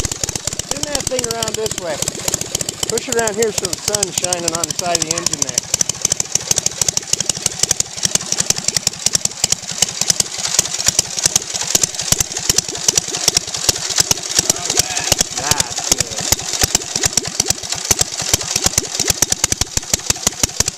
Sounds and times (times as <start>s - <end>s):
Idling: 0.0s - 20.7s
Vehicle: 0.0s - 20.7s
Speech: 0.7s - 2.0s, 2.9s - 5.6s, 14.5s - 16.2s.